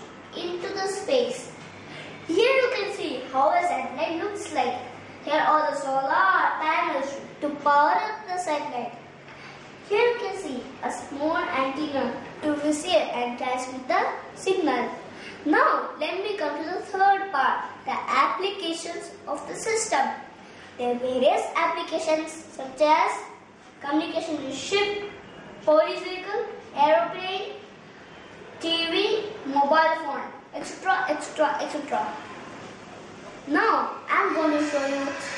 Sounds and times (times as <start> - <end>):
Child speech, kid speaking: 0.3 - 1.6, 2.3 - 9.0, 9.9 - 27.7, 28.6 - 32.3, 33.5 - 35.3.